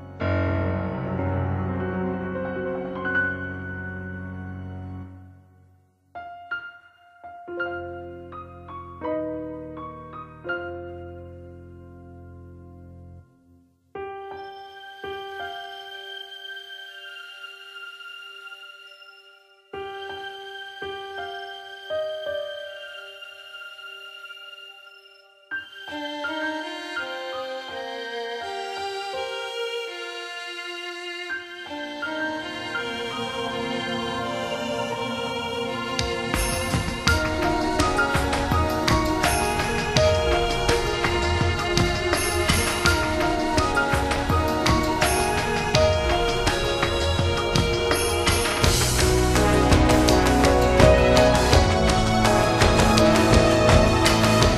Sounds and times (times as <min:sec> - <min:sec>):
Music: 0:00.0 - 0:54.5.